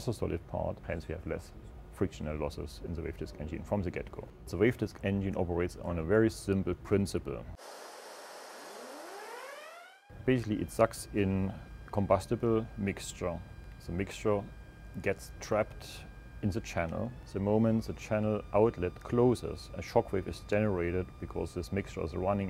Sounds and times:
Speech: 0:00.0 - 0:07.6, 0:10.2 - 0:22.5.

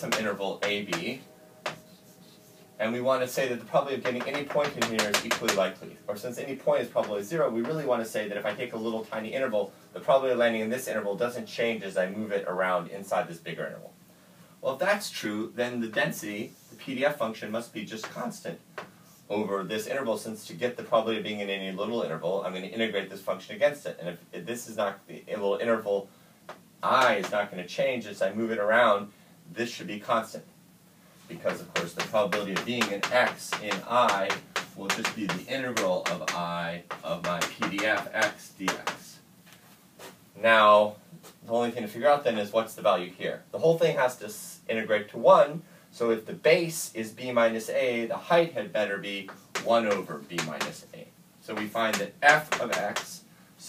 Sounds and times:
Speech: 0:00.0 - 0:01.3, 0:02.8 - 0:14.0, 0:14.6 - 0:18.6, 0:19.3 - 0:26.1, 0:26.8 - 0:30.5, 0:31.3 - 0:39.3, 0:40.4 - 0:53.6.

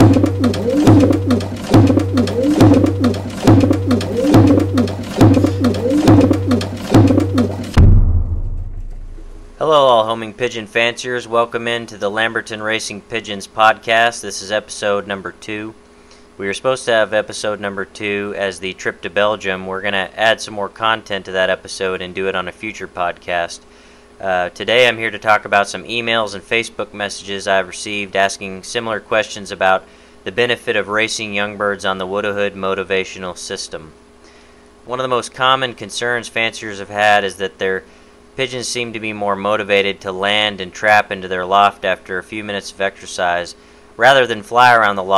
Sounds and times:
Speech: 0:09.6 - 0:15.8, 0:16.4 - 0:34.0, 0:34.9 - 0:45.1.

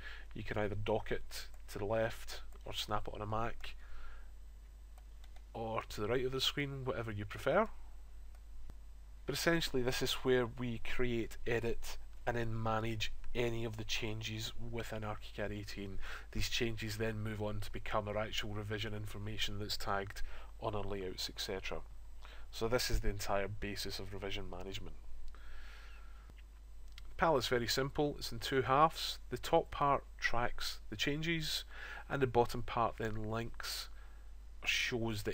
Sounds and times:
Speech: 0:00.4 - 0:03.8, 0:05.6 - 0:07.8, 0:09.3 - 0:21.9, 0:22.5 - 0:25.0, 0:27.0 - 0:34.0, 0:34.6 - 0:35.3.

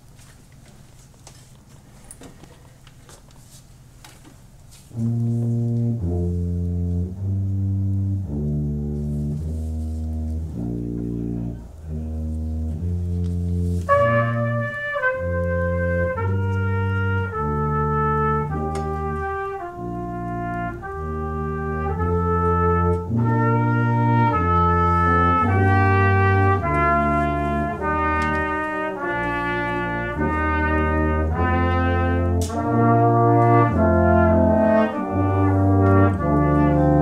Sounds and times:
French horn: 0:04.8 - 0:37.0
Trumpet: 0:04.8 - 0:37.0.

